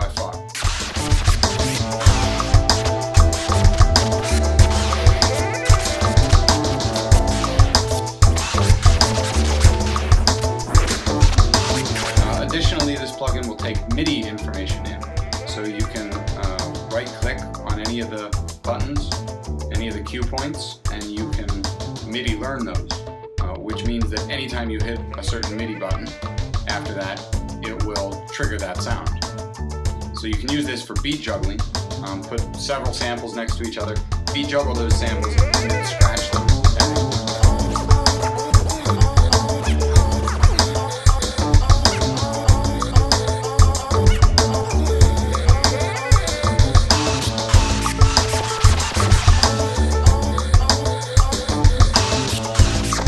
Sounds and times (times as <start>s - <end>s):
Scratching (performance technique): 0.2s - 17.6s, 34.8s - 53.0s.